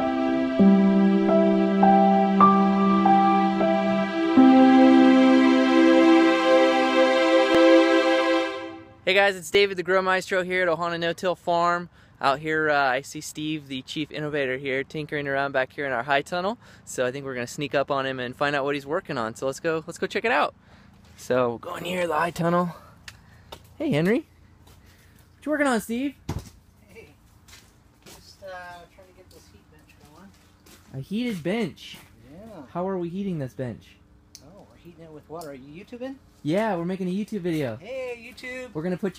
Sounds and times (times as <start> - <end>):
Speech: 9.1 - 20.5, 21.2 - 22.8, 23.8 - 24.3, 25.4 - 26.2, 28.1 - 39.1.